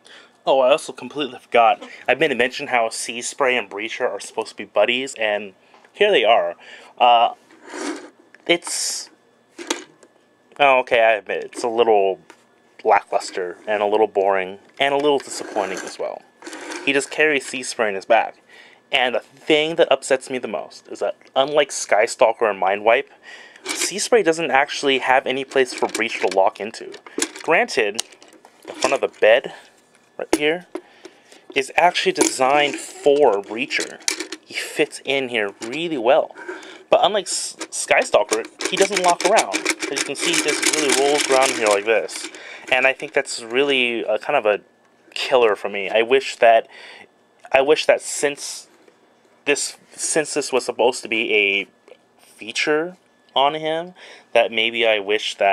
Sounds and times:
Speech: 0:00.4 - 0:07.4, 0:08.4 - 0:09.2, 0:10.6 - 0:16.2, 0:16.9 - 0:23.1, 0:23.8 - 0:28.0, 0:28.8 - 0:30.7, 0:31.6 - 0:46.7, 0:47.5 - 0:48.7, 0:49.4 - 0:55.5.

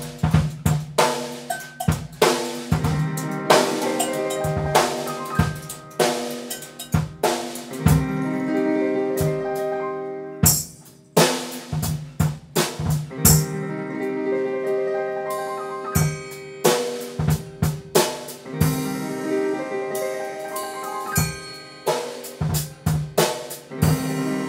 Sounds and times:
Music: 0:00.0 - 0:24.4.

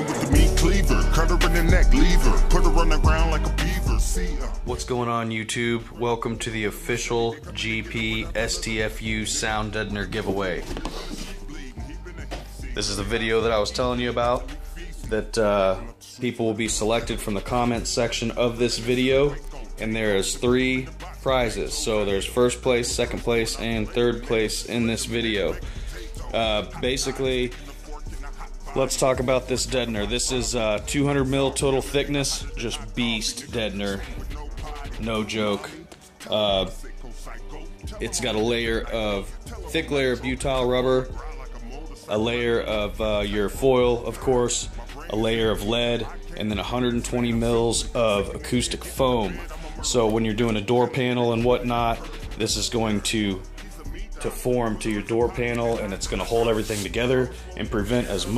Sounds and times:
Music: 0:00.0 - 0:58.3
Speech: 0:04.6 - 0:10.8, 0:12.7 - 0:27.6, 0:28.7 - 0:34.2, 0:34.8 - 0:36.9, 0:37.8 - 0:41.2, 0:42.1 - 0:58.3.

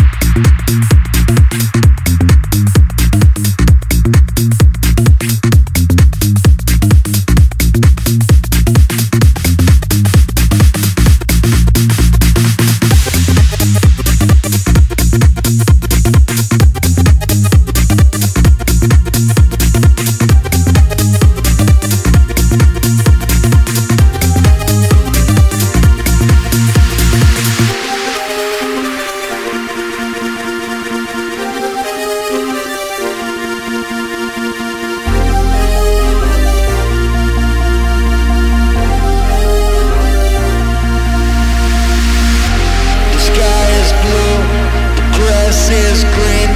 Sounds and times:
Music: 0:00.0 - 0:46.5.

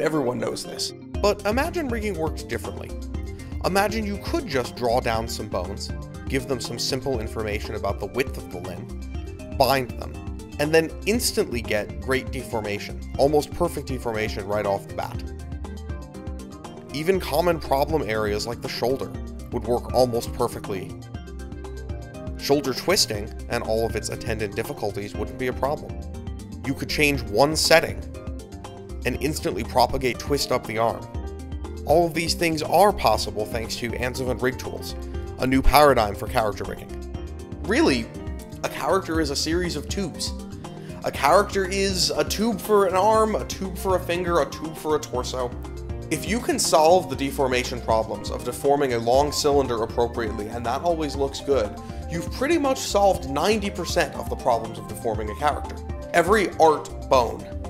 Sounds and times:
Speech: 0:00.0 - 0:03.0, 0:03.6 - 0:08.9, 0:09.6 - 0:15.3, 0:16.9 - 0:21.0, 0:22.4 - 0:26.0, 0:26.7 - 0:28.0, 0:29.0 - 0:31.1, 0:31.9 - 0:36.9, 0:37.7 - 0:40.4, 0:41.0 - 0:57.5
Music: 0:00.0 - 0:57.6.

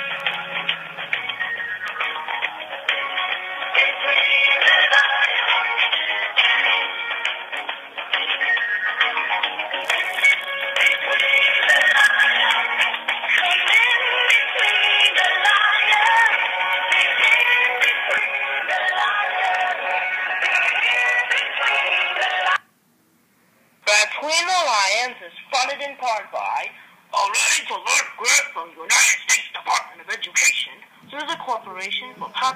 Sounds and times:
Music: 0:00.0 - 0:22.6
Speech: 0:23.9 - 0:32.5.

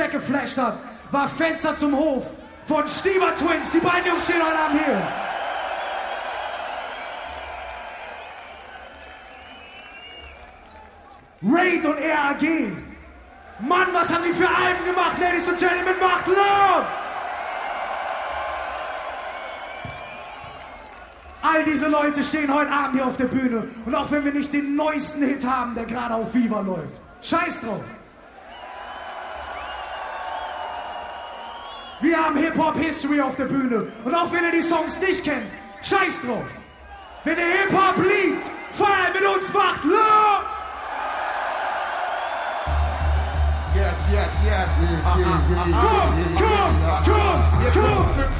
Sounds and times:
Speech: 0:00.0 - 0:05.1, 0:11.4 - 0:13.0, 0:13.6 - 0:16.9, 0:21.4 - 0:28.0, 0:32.0 - 0:36.6, 0:37.3 - 0:40.5, 0:43.7 - 0:48.3.

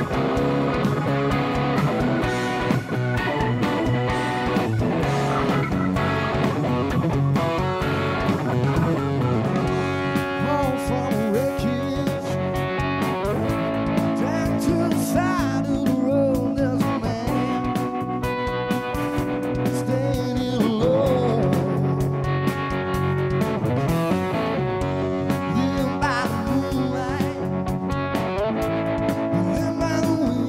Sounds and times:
Music: 0:00.0 - 0:30.4.

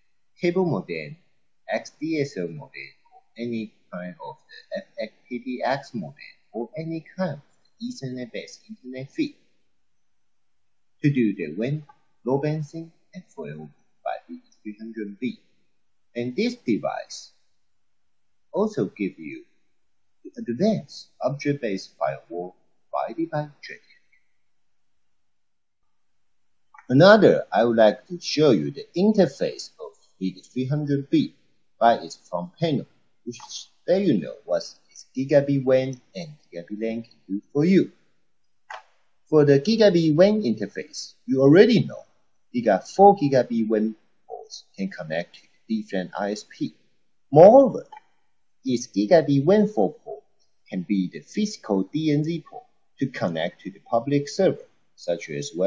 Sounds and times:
Narration, monologue: 0:00.0 - 0:55.6.

